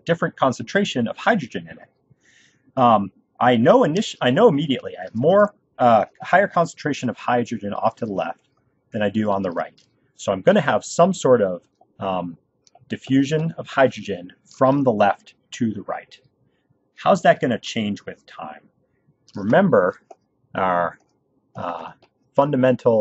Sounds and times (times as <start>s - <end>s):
Narration, monologue: 0.0s - 23.0s.